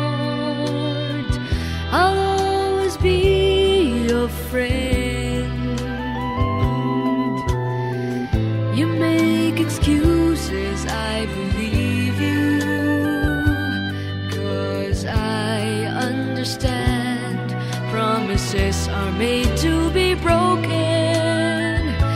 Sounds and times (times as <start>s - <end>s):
Music: 0.0s - 22.1s.